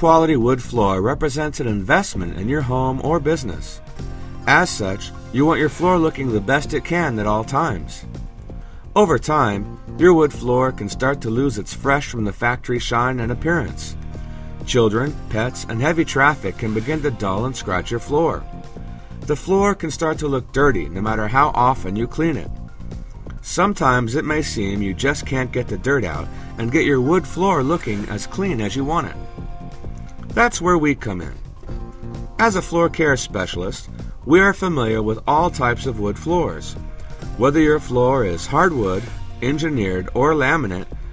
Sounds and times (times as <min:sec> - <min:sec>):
Speech: 0:00.0 - 0:03.8, 0:04.5 - 0:08.1, 0:09.0 - 0:14.0, 0:14.7 - 0:18.5, 0:19.3 - 0:22.5, 0:23.4 - 0:29.3, 0:30.3 - 0:31.4, 0:32.4 - 0:36.8, 0:37.4 - 0:40.9
Music: 0:00.0 - 0:41.1.